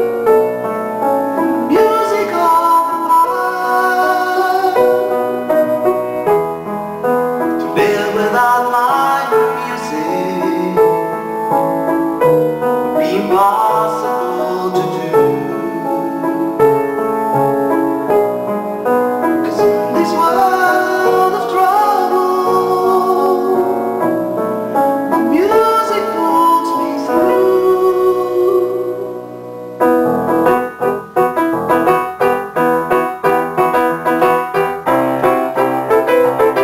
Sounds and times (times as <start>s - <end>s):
Music: 0.0s - 36.6s.